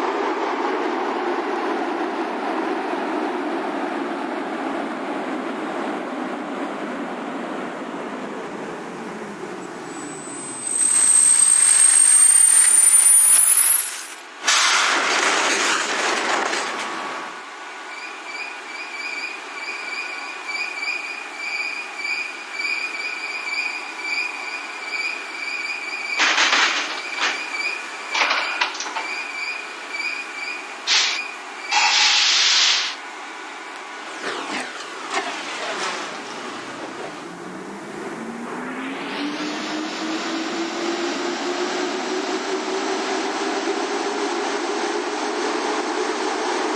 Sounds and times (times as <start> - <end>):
Railroad car, train wagon: 0.0 - 38.9, 39.5 - 46.7
Train: 0.0 - 46.7.